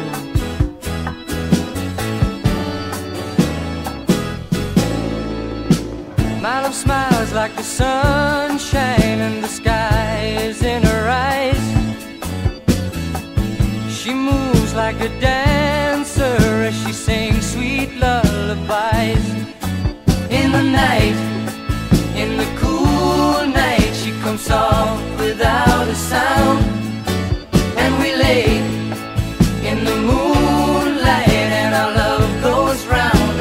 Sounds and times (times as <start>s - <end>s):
Music: 0.0s - 33.4s.